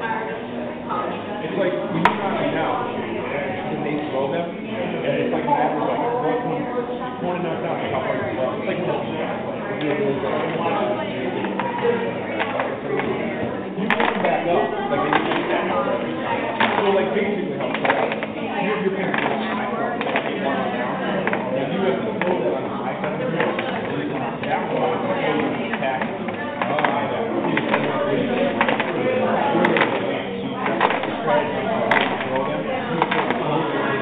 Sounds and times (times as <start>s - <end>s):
Speech: 0.0s - 34.0s.